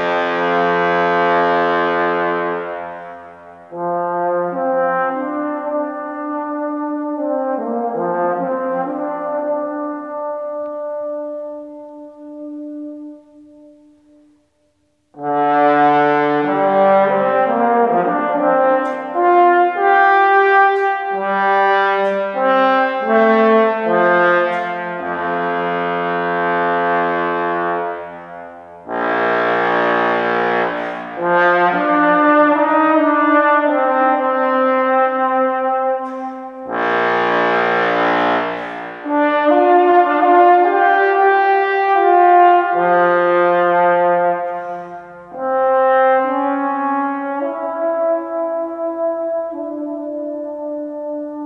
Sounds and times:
Trombone: 0:00.0 - 0:51.4.

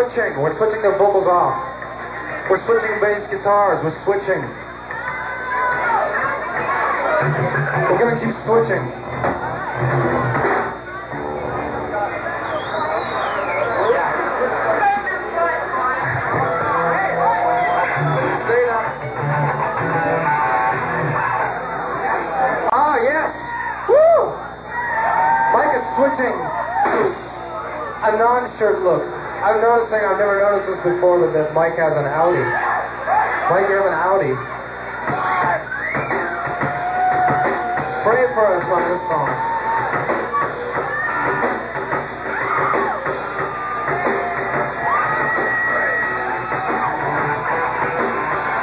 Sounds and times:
Speech: 0:28.0 - 0:32.6, 0:38.0 - 0:39.4.

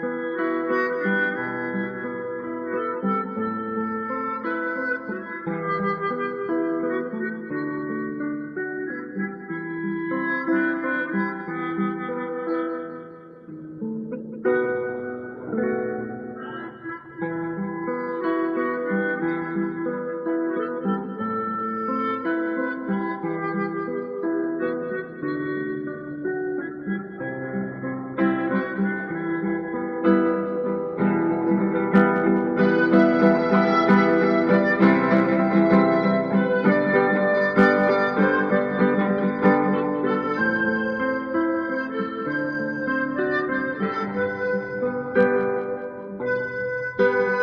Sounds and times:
Guitar: 0:00.0 - 0:47.4.

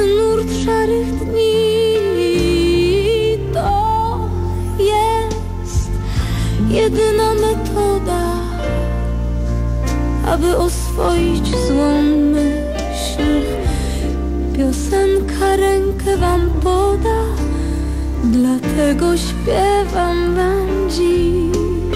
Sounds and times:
Vocal music: 0:00.0 - 0:21.9.

